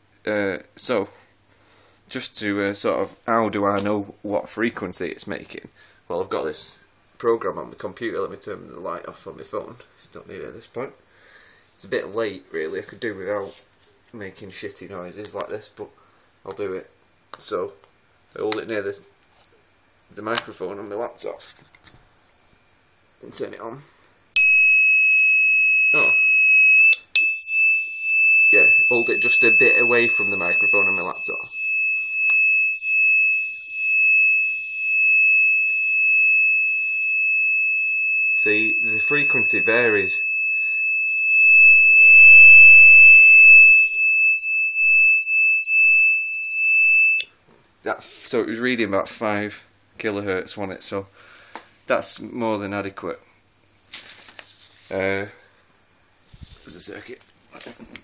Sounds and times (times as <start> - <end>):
Speech: 0.2 - 1.2, 2.1 - 11.0, 11.8 - 17.8, 18.4 - 19.2, 20.1 - 21.7, 23.2 - 23.9, 28.5 - 31.5, 38.4 - 40.2, 47.8 - 51.1, 51.9 - 53.3, 54.9 - 55.5, 56.6 - 58.0.